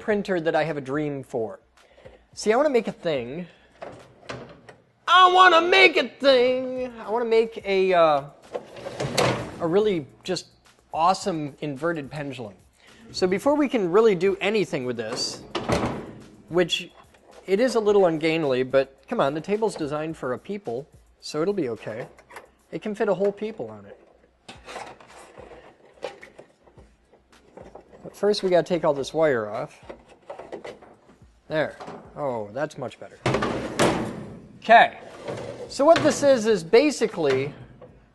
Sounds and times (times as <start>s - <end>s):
Speech: 2.4s - 3.5s, 5.1s - 8.4s, 9.6s - 10.4s, 11.0s - 15.4s, 16.5s - 16.9s, 17.5s - 22.1s, 22.7s - 24.0s, 28.0s - 29.8s, 31.5s - 33.2s, 34.6s - 35.0s, 35.7s - 37.6s.